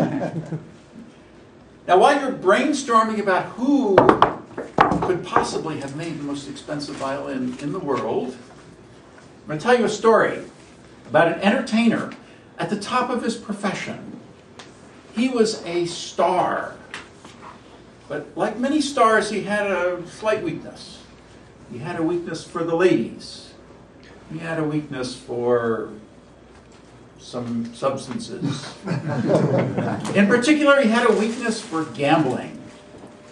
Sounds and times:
Speech: 0:01.9 - 0:04.1, 0:05.0 - 0:08.5, 0:09.5 - 0:14.2, 0:15.2 - 0:16.9, 0:18.1 - 0:23.6, 0:24.3 - 0:26.1, 0:27.2 - 0:28.8, 0:29.9 - 0:32.7.

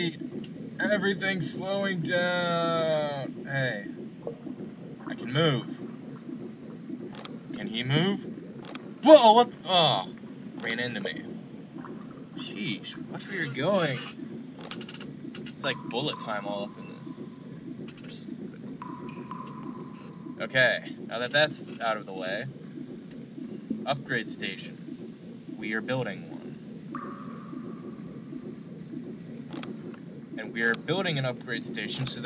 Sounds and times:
Speech: 0:00.8 - 0:03.9, 0:05.1 - 0:05.8, 0:07.6 - 0:08.2, 0:09.0 - 0:11.3, 0:12.4 - 0:14.1, 0:15.6 - 0:17.2, 0:20.4 - 0:22.5, 0:23.9 - 0:24.7, 0:25.6 - 0:26.4, 0:30.4 - 0:32.2.

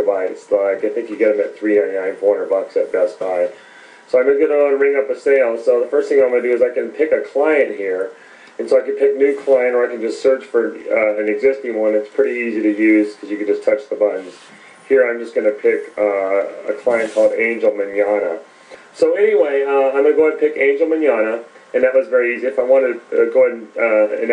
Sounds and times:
Speech: 0:00.0 - 0:24.3.

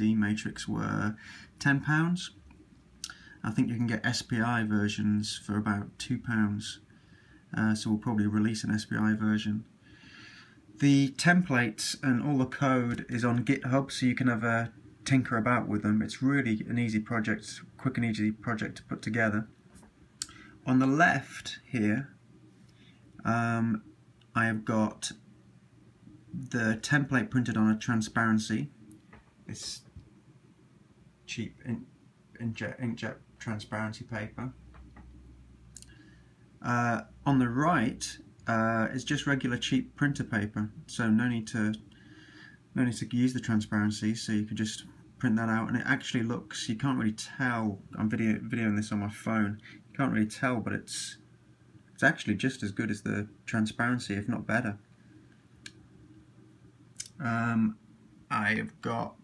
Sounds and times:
Speech: 0:00.0 - 0:02.4, 0:03.4 - 0:06.8, 0:07.5 - 0:09.7, 0:10.8 - 0:19.5, 0:20.6 - 0:22.2, 0:23.2 - 0:25.2, 0:26.3 - 0:28.8, 0:29.5 - 0:30.0, 0:31.3 - 0:34.6, 0:36.6 - 0:41.9, 0:42.7 - 0:51.3, 0:52.0 - 0:54.9, 0:57.0 - 0:59.2.

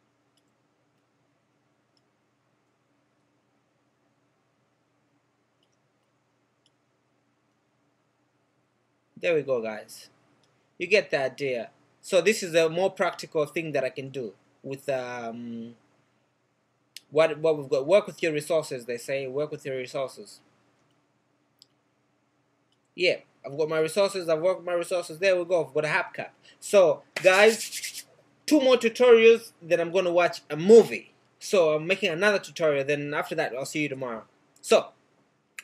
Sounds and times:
Clicking: 0:00.3 - 0:01.1, 0:01.9 - 0:02.8, 0:05.6 - 0:06.8, 0:10.3 - 0:10.6, 0:20.7 - 0:21.8, 0:22.7 - 0:22.9.

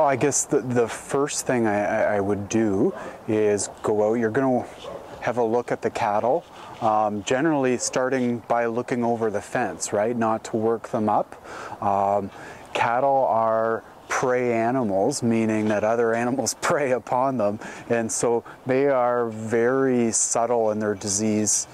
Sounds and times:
Speech: 0:00.0 - 0:21.7.

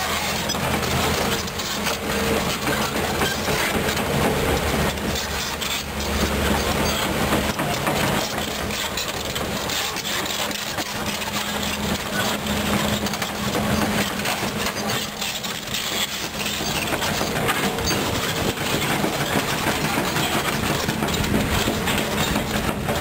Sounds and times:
Vehicle: 0:00.0 - 0:23.0.

